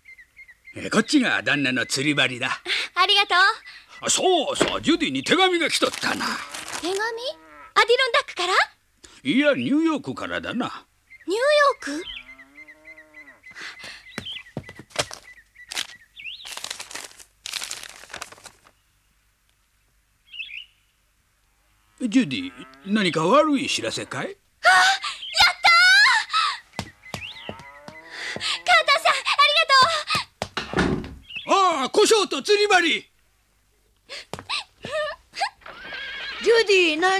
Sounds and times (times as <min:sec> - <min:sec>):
Outside, rural or natural: 0:00.0 - 0:37.1.